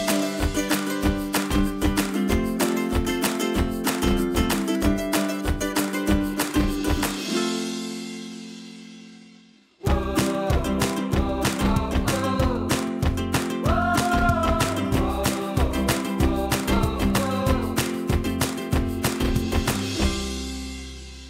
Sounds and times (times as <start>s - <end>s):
Music: 0.0s - 21.3s.